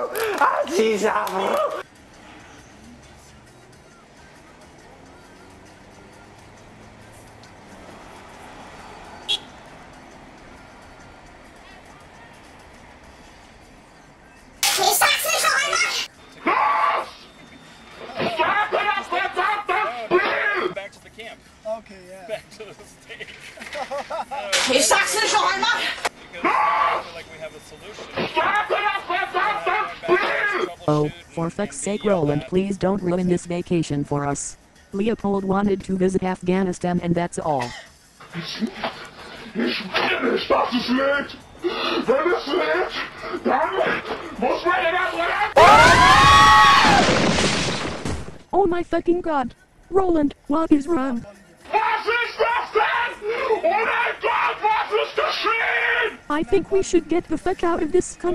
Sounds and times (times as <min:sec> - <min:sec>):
Outside, urban or manmade: 0:00.0 - 0:58.3.